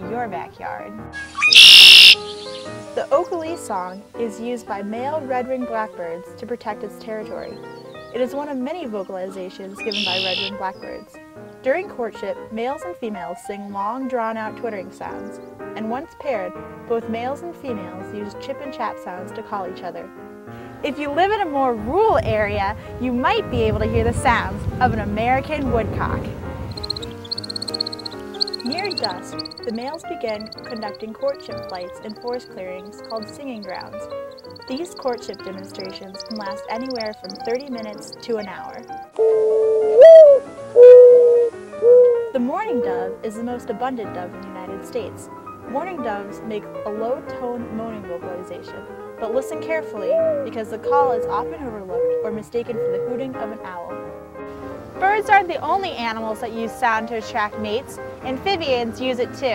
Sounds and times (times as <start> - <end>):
Speech: 0.0 - 1.0, 3.0 - 7.6, 8.2 - 20.1, 20.8 - 26.3, 28.6 - 34.0, 34.7 - 38.9, 42.3 - 54.0, 55.0 - 59.5
Music: 0.0 - 59.5.